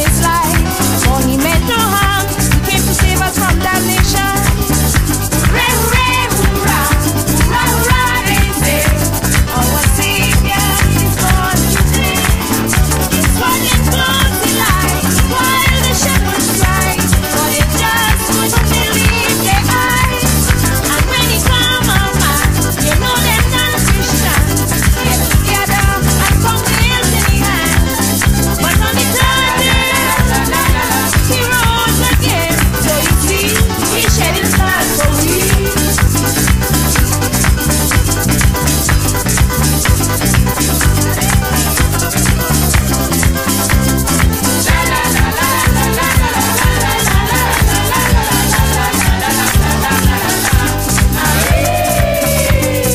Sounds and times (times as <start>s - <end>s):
Female singing: 0.0s - 4.6s, 5.5s - 28.0s, 28.6s - 35.9s, 44.6s - 49.5s, 51.2s - 52.9s
Music: 0.0s - 52.9s.